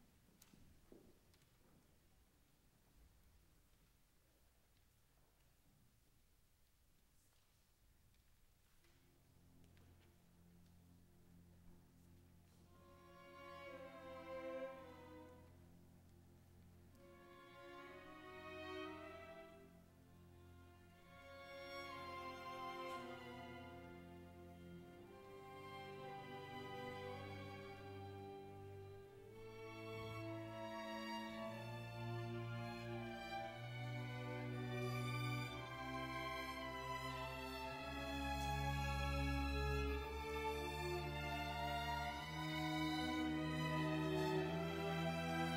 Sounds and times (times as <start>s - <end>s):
Orchestra: 0.0s - 45.5s
Violin, fiddle: 11.6s - 15.6s, 16.9s - 45.5s.